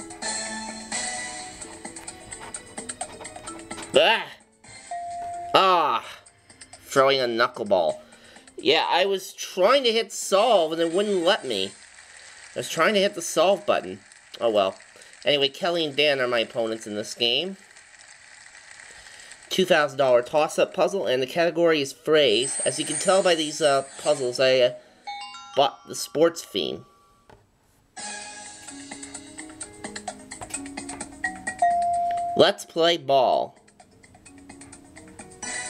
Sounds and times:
Music: 0.0 - 11.4, 28.0 - 35.7
Speech: 6.9 - 8.0, 8.6 - 11.7, 12.6 - 17.6, 19.5 - 24.8, 25.6 - 26.9, 32.4 - 33.6.

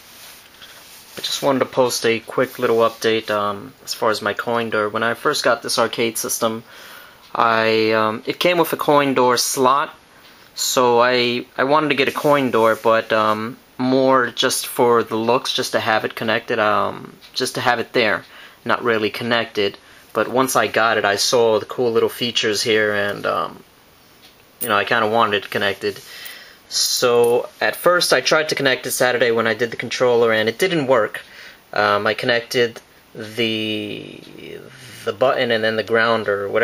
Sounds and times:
Speech: 1.2 - 6.7, 7.3 - 10.0, 10.6 - 23.6, 24.6 - 26.1, 26.7 - 36.6.

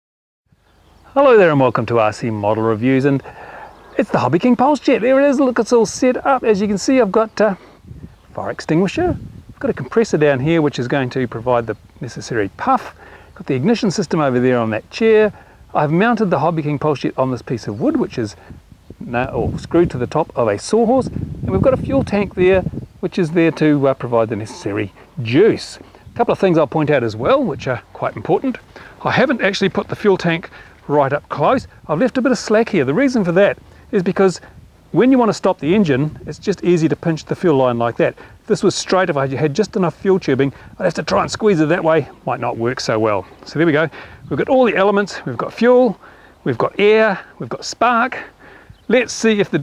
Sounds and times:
Speech: 1.1 - 3.3, 3.9 - 7.6, 8.3 - 18.4, 19.0 - 49.6.

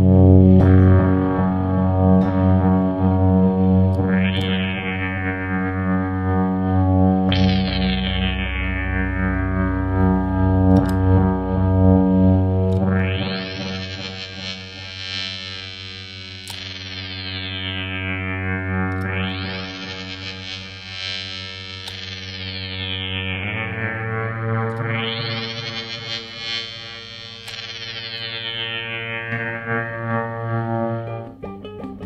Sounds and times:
Effects unit: 0.0 - 32.0.

